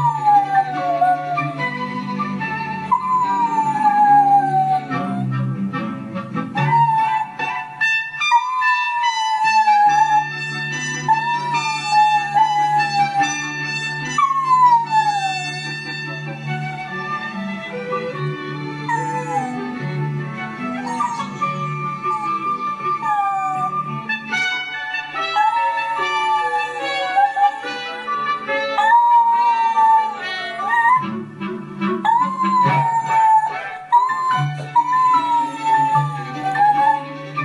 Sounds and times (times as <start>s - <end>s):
Howl: 0.0s - 5.5s, 6.6s - 18.2s, 18.9s - 20.0s, 20.6s - 24.1s, 25.1s - 31.2s, 32.0s - 37.4s
Music: 0.0s - 37.4s.